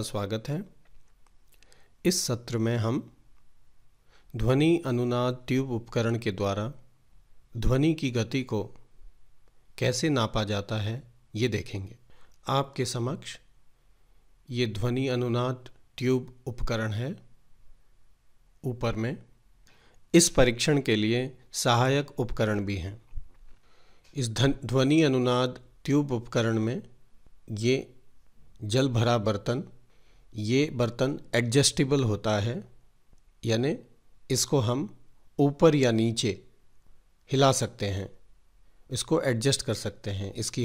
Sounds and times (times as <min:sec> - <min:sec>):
Speech: 0:00.0 - 0:00.8, 0:02.0 - 0:03.2, 0:04.3 - 0:06.9, 0:07.5 - 0:08.9, 0:09.8 - 0:13.5, 0:14.5 - 0:17.3, 0:18.6 - 0:19.3, 0:20.1 - 0:23.1, 0:24.1 - 0:28.0, 0:28.6 - 0:29.8, 0:30.4 - 0:32.8, 0:33.4 - 0:36.6, 0:37.3 - 0:38.2, 0:38.9 - 0:40.6.